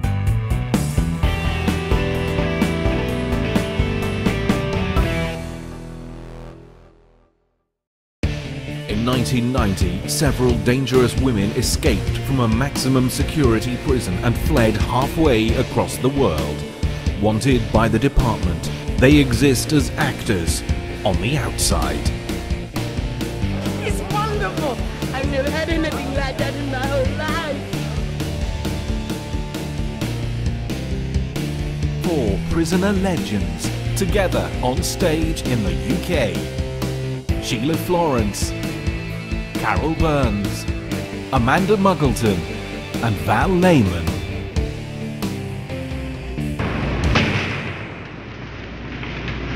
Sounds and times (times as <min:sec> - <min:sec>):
Music: 0:00.0 - 0:48.0
Speech: 0:08.9 - 0:16.6, 0:17.2 - 0:22.2, 0:23.8 - 0:27.6, 0:32.0 - 0:36.5, 0:37.4 - 0:38.6, 0:39.6 - 0:40.7, 0:41.3 - 0:44.2.